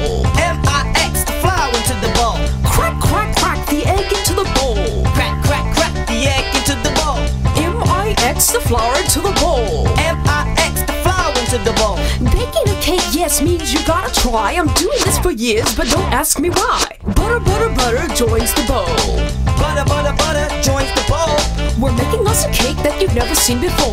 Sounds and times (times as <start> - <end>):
Music: 0.0 - 23.9
Speech: 12.2 - 19.2.